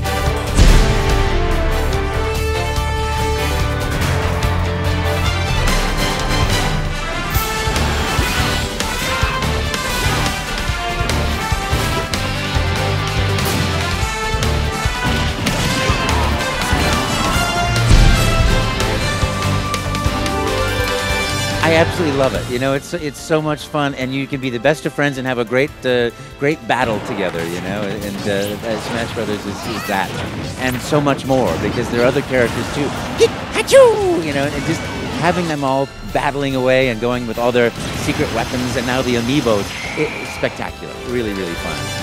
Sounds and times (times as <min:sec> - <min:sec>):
Music: 0:00.0 - 0:42.0
Speech: 0:21.6 - 0:42.0.